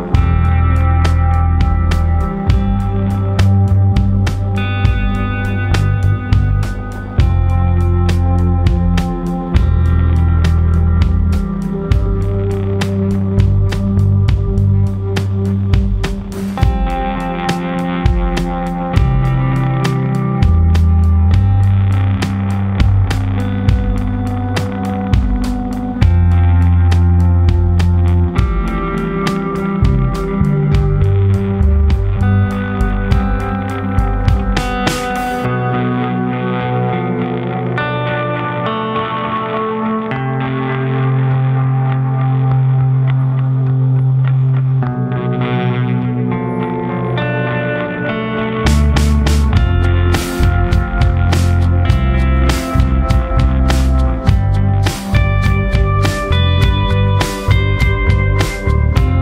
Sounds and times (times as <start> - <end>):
Music: 0.0 - 59.2.